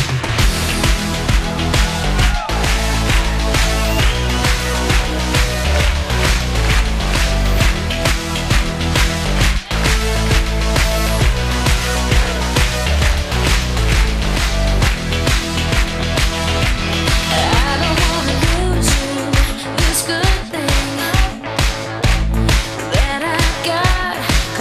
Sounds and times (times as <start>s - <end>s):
Music: 0.0s - 24.6s.